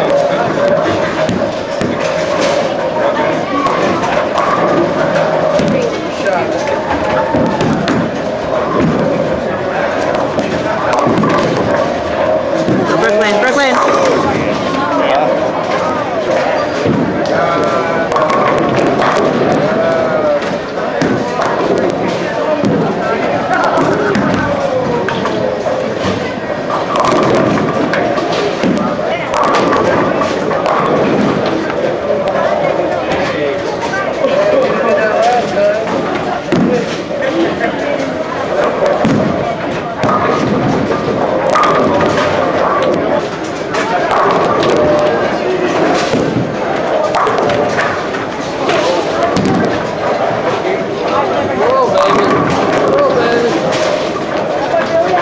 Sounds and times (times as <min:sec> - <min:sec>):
Speech: 0:08.5 - 0:55.2.